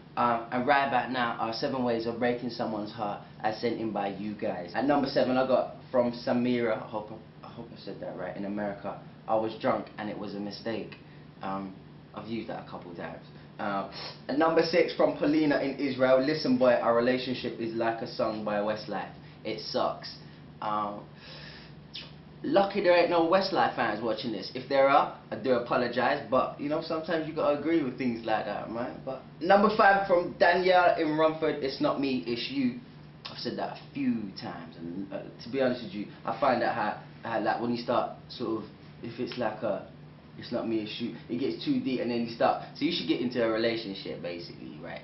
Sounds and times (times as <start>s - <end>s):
Speech: 0.2s - 21.1s, 22.0s - 45.0s.